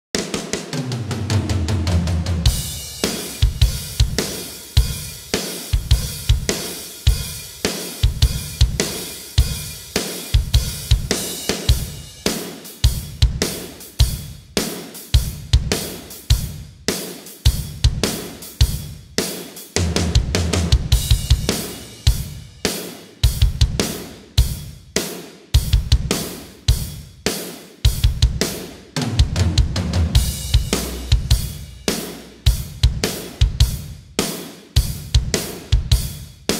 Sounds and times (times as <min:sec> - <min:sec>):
Music: 0:00.2 - 0:36.5.